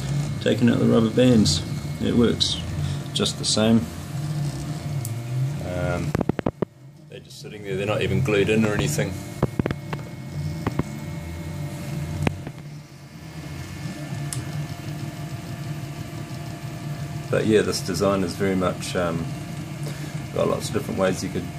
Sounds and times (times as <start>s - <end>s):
Speech: 0.4s - 2.6s, 3.2s - 3.9s, 7.1s - 9.2s, 17.3s - 19.3s, 20.3s - 21.5s.